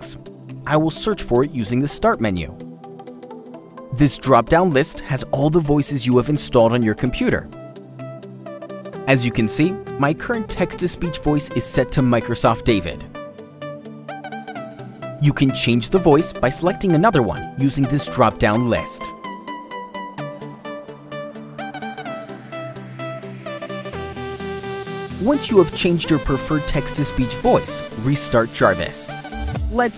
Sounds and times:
Male speech, man speaking: 0:00.0 - 0:02.6, 0:03.9 - 0:07.5, 0:09.1 - 0:13.1, 0:15.2 - 0:19.1, 0:25.2 - 0:29.2
Music: 0:00.0 - 0:29.9
Narration, monologue: 0:00.0 - 0:29.9.

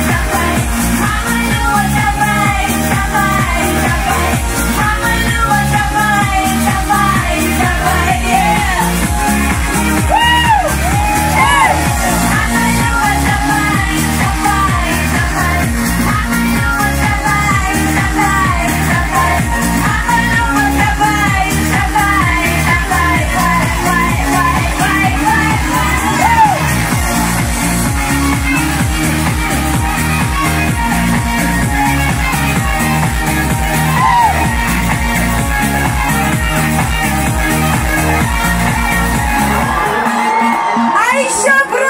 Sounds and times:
Music: 0:00.0 - 0:41.9.

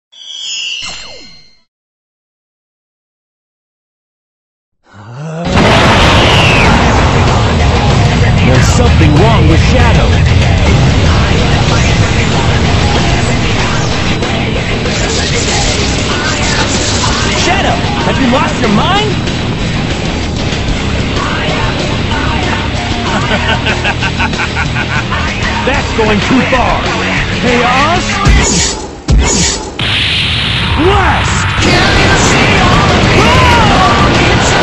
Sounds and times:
Music: 0:00.1 - 0:01.7, 0:05.5 - 0:30.6, 0:31.4 - 0:34.6
Speech: 0:08.4 - 0:10.2, 0:17.4 - 0:19.2, 0:25.6 - 0:28.2, 0:30.8 - 0:31.4.

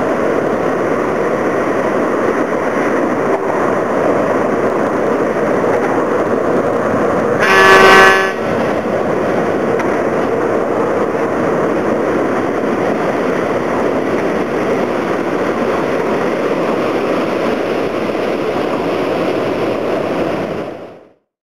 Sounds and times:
Boat, Water vehicle: 0:00.0 - 0:21.2.

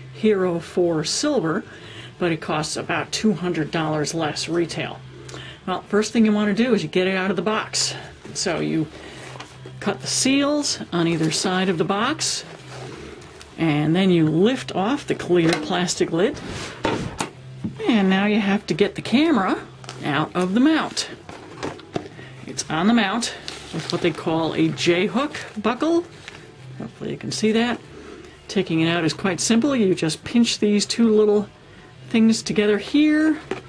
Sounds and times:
Speech: 0:00.2 - 0:05.0, 0:05.7 - 0:08.9, 0:09.8 - 0:12.5, 0:13.6 - 0:16.4, 0:17.8 - 0:21.2, 0:22.5 - 0:26.1, 0:26.8 - 0:27.8, 0:28.5 - 0:31.5, 0:32.1 - 0:33.5.

